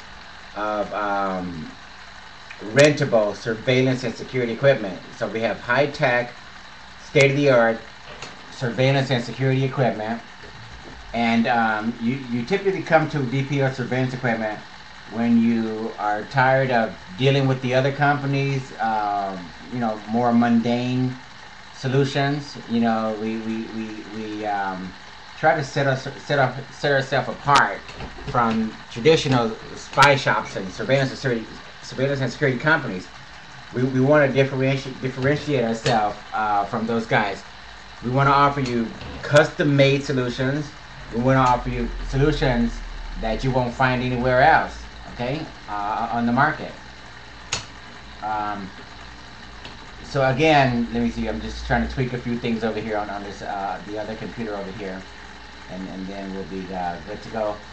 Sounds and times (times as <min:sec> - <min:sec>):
Inside, small room: 0:00.0 - 0:57.7
Speech: 0:00.6 - 0:01.8, 0:02.5 - 0:06.4, 0:07.0 - 0:07.9, 0:08.5 - 0:10.3, 0:11.0 - 0:21.2, 0:21.8 - 0:46.9, 0:48.2 - 0:48.8, 0:50.0 - 0:55.1, 0:55.7 - 0:57.7.